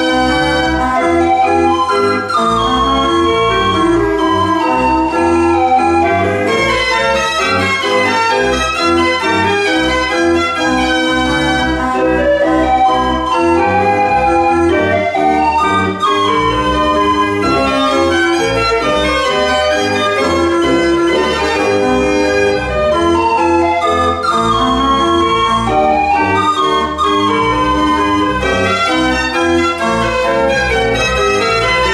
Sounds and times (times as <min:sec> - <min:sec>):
Music: 0:00.0 - 0:31.9.